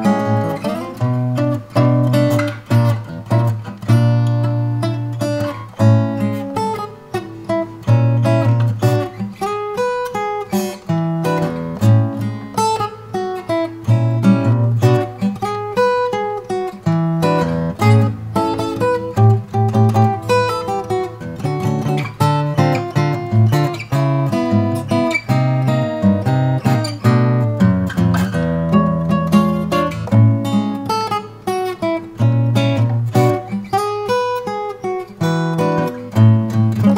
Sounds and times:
Acoustic guitar: 0.0s - 36.9s.

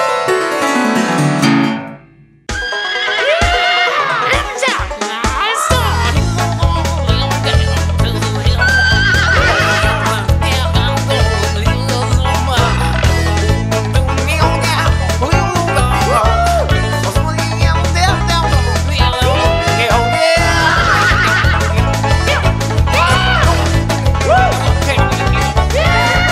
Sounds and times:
Funny music: 0.0s - 26.3s.

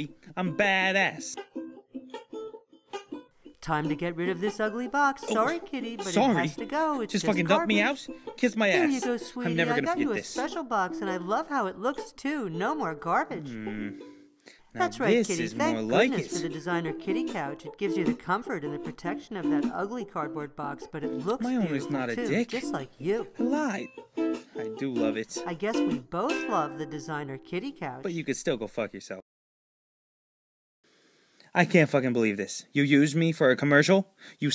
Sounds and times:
Speech: 0.0s - 1.4s, 3.6s - 14.0s, 14.8s - 23.9s, 24.6s - 29.2s, 31.5s - 34.5s
Music: 0.0s - 28.5s.

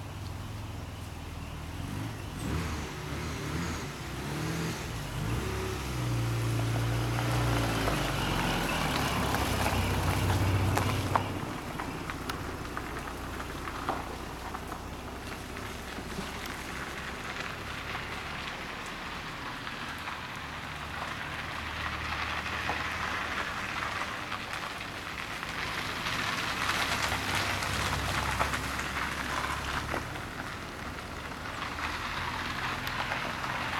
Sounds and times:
Car: 0.0s - 33.7s.

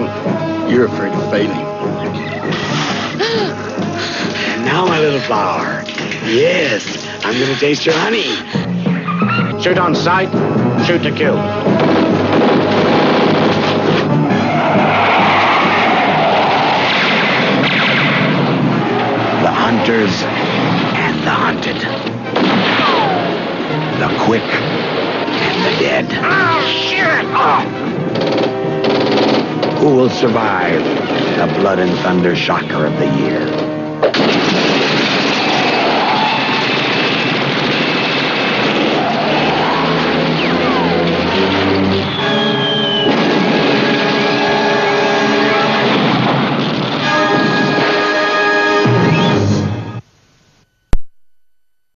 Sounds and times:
Music: 0.0s - 50.1s.

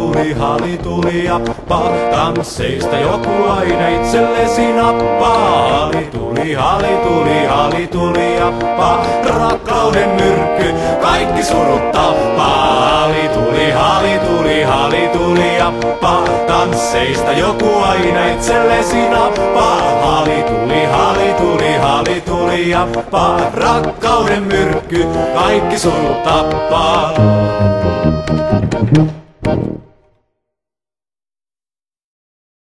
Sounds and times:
Folk music: 0.0s - 30.0s.

